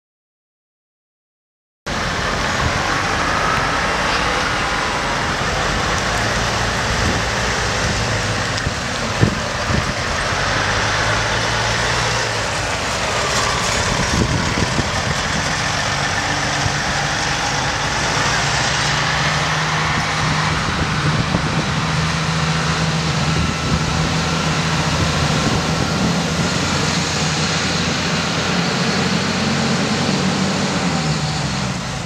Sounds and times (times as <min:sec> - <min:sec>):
Vehicle: 0:01.9 - 0:32.0.